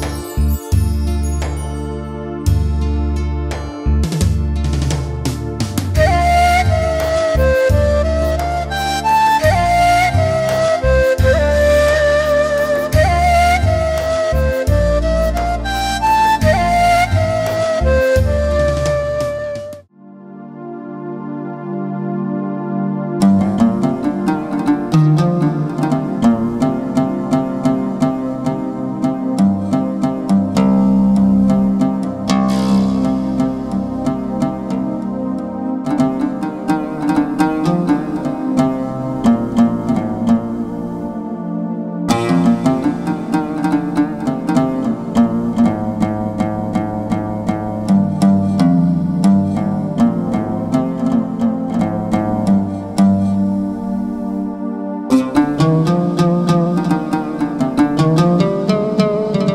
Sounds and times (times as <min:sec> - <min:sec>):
Music: 0:00.0 - 0:59.5.